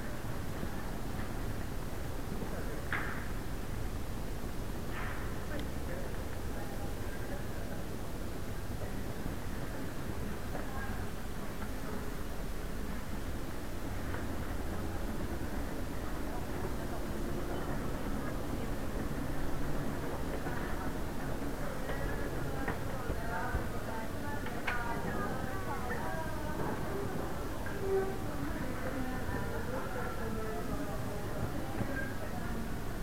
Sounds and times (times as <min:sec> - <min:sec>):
Speech: 0:02.2 - 0:03.3, 0:05.4 - 0:12.4, 0:14.1 - 0:33.0.